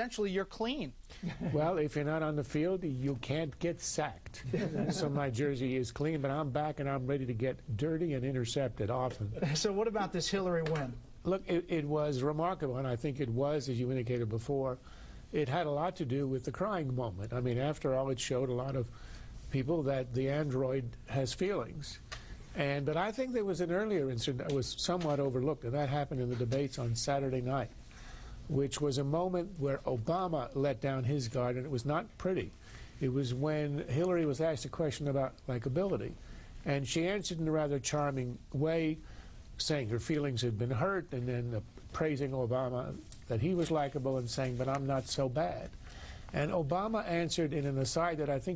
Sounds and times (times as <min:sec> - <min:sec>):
Speech: 0:01.6 - 0:14.8, 0:15.4 - 0:18.9, 0:22.6 - 0:27.7, 0:39.6 - 0:45.7, 0:46.4 - 0:48.5.